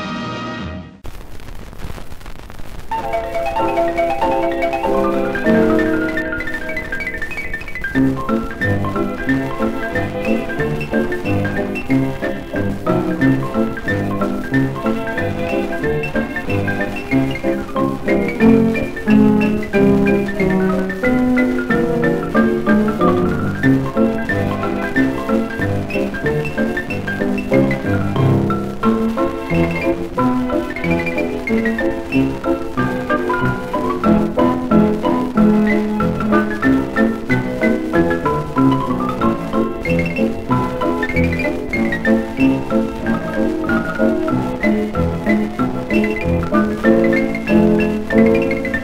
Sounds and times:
Music: 0.0s - 1.0s, 2.9s - 48.8s.

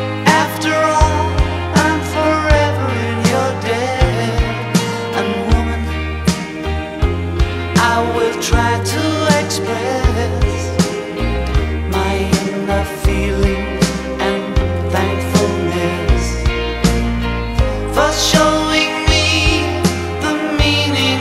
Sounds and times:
Christian music: 0.0s - 21.2s
Independent music: 0.0s - 21.2s.

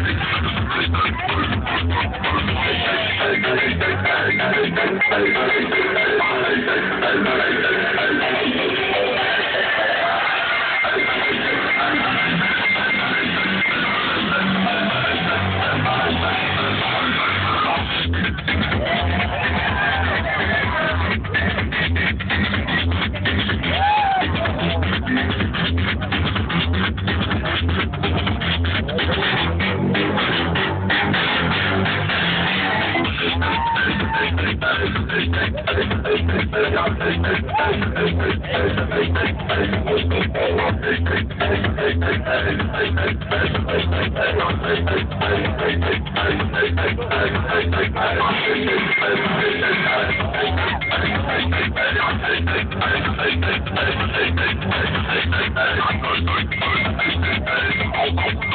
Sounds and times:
Music: 0.0s - 58.5s.

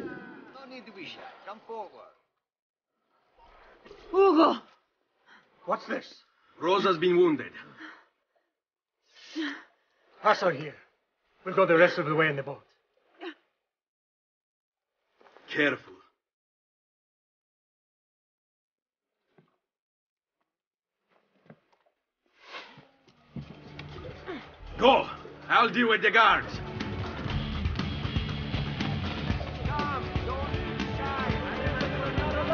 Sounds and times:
Speech: 11.5s - 12.6s, 15.5s - 16.0s, 24.8s - 26.6s.

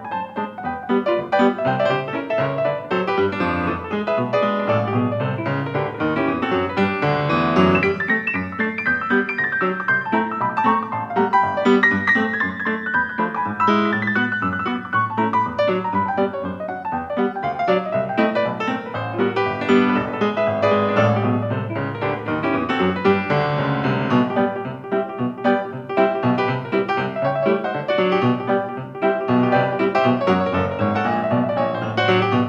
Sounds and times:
Music: 0.0s - 32.4s.

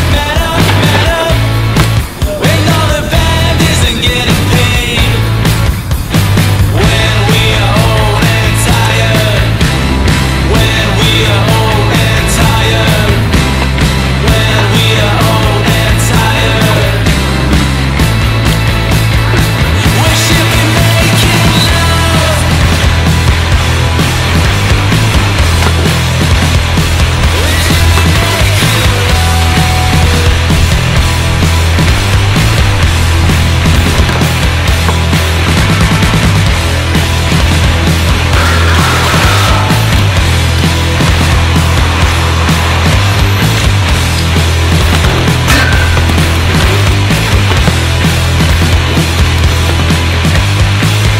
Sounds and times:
Bicycle: 0.0s - 51.1s
Music: 0.0s - 51.1s.

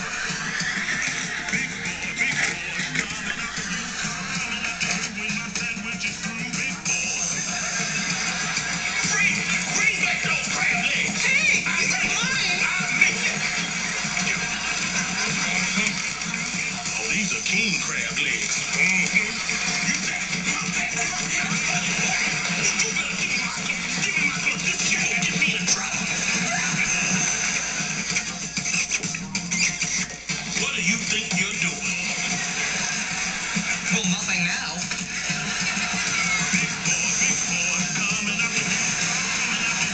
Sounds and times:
Music: 0.0s - 39.9s
Speech: 17.0s - 19.4s, 30.6s - 32.3s, 33.9s - 34.9s.

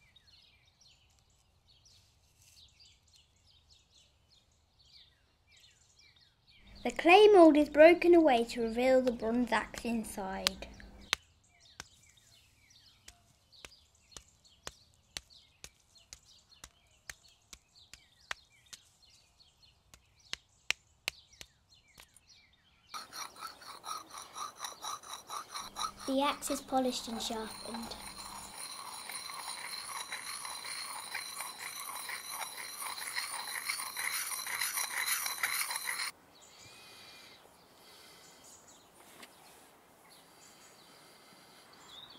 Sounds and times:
Speech: 6.8s - 10.7s, 26.1s - 28.0s.

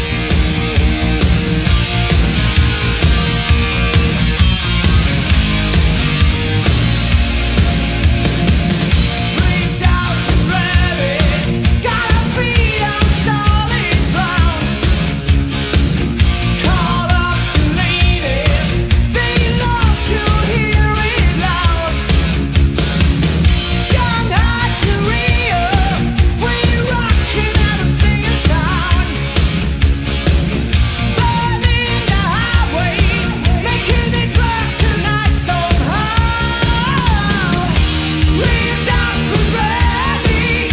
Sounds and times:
Music: 0.0s - 40.7s.

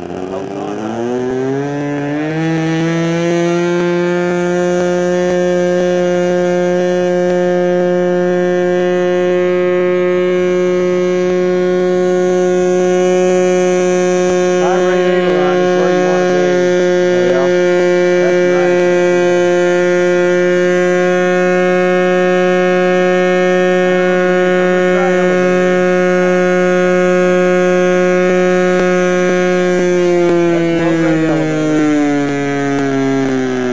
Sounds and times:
Hum: 0.0s - 33.7s.

